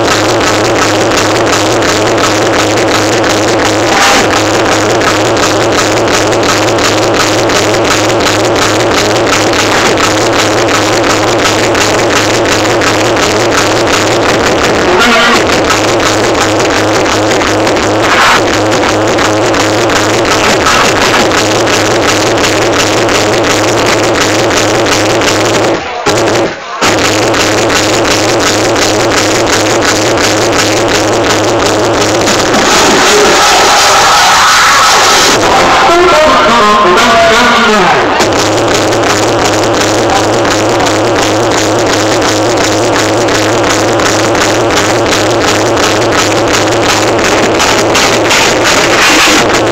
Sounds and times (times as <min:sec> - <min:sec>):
Techno: 0:00.0 - 0:49.7.